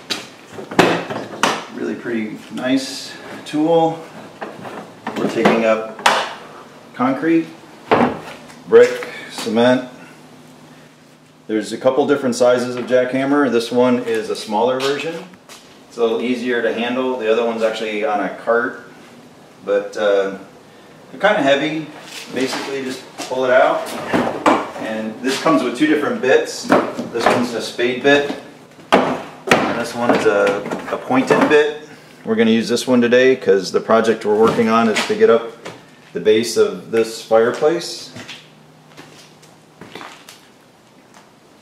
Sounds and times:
Speech: 1.7 - 4.1, 5.2 - 6.0, 6.9 - 7.6, 8.7 - 10.0, 11.5 - 18.9, 19.6 - 20.5, 21.1 - 24.0, 24.8 - 28.5, 29.6 - 35.6, 36.2 - 38.2.

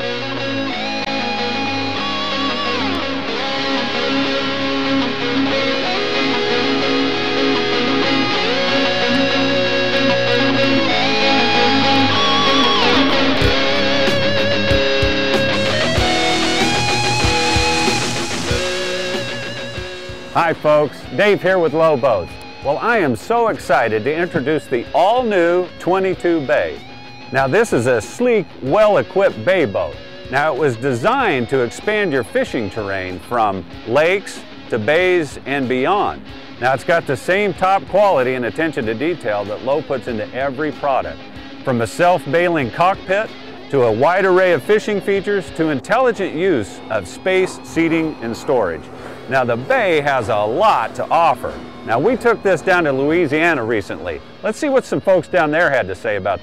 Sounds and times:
Music: 0.0 - 56.4
Speech: 20.4 - 26.8, 27.4 - 56.4.

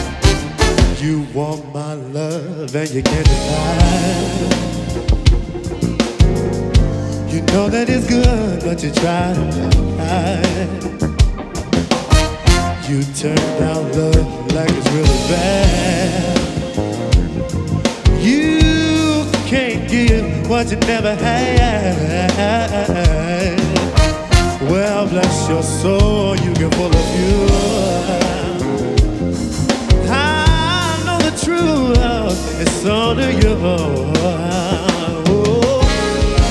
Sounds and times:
Music: 0.0 - 36.5.

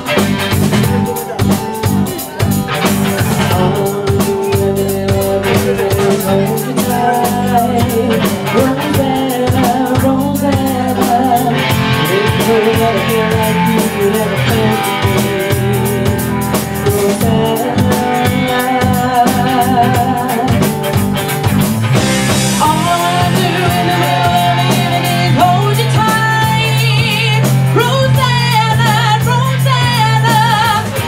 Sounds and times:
Music: 0.0 - 31.0.

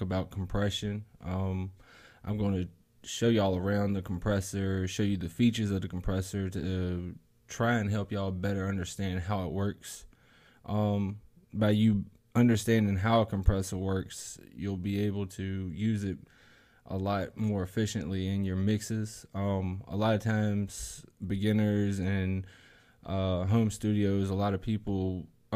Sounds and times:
Speech: 0.0 - 10.1, 10.7 - 16.3, 16.9 - 25.5.

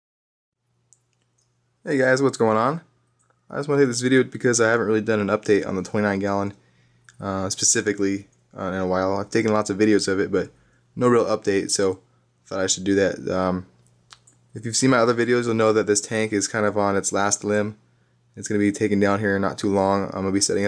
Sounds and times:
Inside, small room: 0.6 - 20.6
Speech: 1.8 - 2.9, 3.5 - 13.7, 14.6 - 17.8, 18.4 - 20.6.

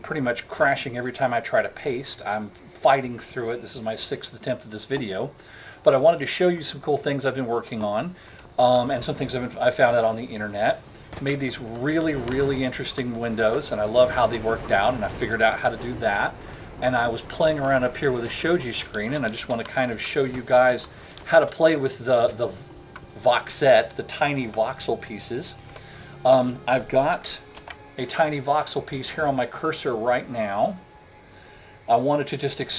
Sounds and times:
Speech: 0.0 - 25.6, 26.3 - 27.4, 28.0 - 30.8, 31.9 - 32.7.

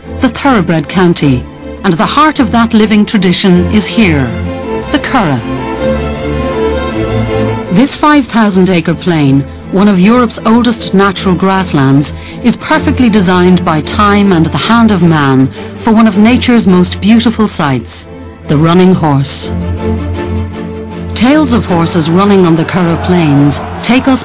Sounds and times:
Music: 0.0 - 24.2
Speech: 0.2 - 5.5, 7.8 - 19.5, 21.2 - 24.2.

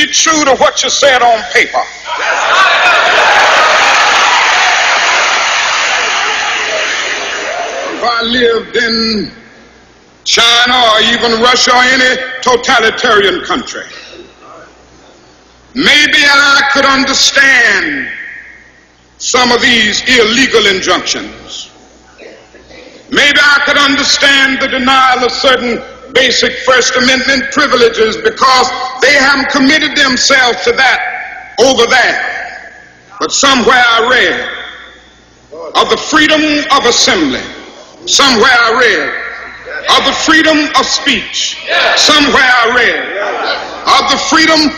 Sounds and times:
Male speech, man speaking: 0.0 - 1.9, 7.9 - 9.4, 10.3 - 14.7, 15.8 - 18.2, 19.2 - 21.8, 23.1 - 34.7, 35.5 - 44.7
Narration, monologue: 0.0 - 2.2, 7.9 - 44.7.

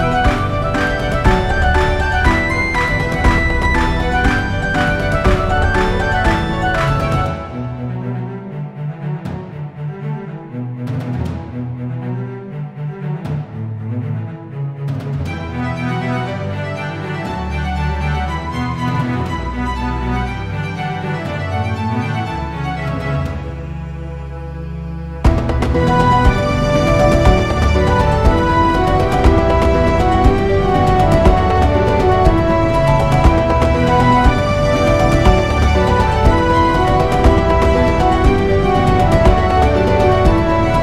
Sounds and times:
Music: 0.0 - 40.8.

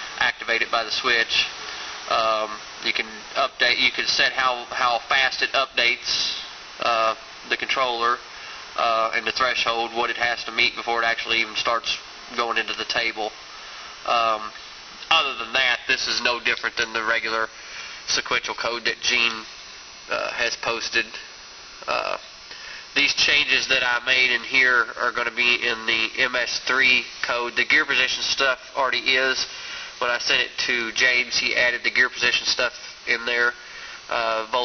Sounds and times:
Speech: 0.2 - 8.2, 8.8 - 13.4, 14.1 - 17.5, 18.1 - 19.5, 20.1 - 21.3, 21.9 - 22.3, 23.0 - 34.6.

